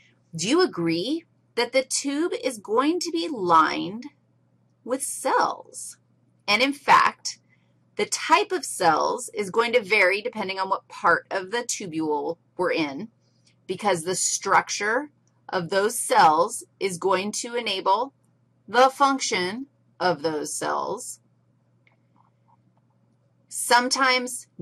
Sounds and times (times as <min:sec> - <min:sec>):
Speech: 0:00.4 - 0:04.1, 0:04.9 - 0:07.4, 0:08.0 - 0:13.1, 0:13.7 - 0:18.1, 0:18.7 - 0:21.2, 0:23.5 - 0:24.6.